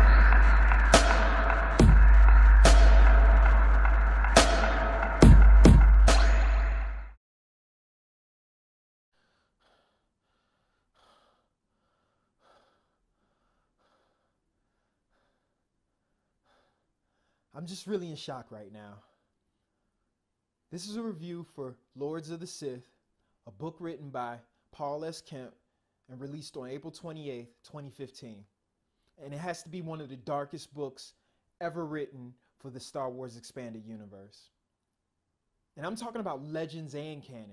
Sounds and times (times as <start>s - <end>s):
Music: 0.0s - 7.2s
Inside, small room: 9.2s - 37.5s.